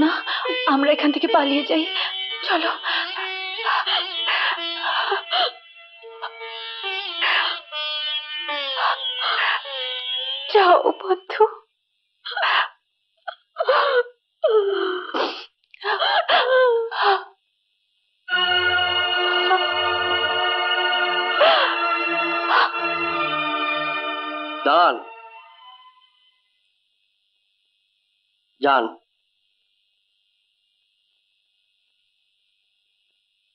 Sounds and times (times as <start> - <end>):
Speech: 0.0 - 2.8, 10.5 - 11.6, 28.6 - 29.0
Music: 0.0 - 11.6, 18.3 - 26.8.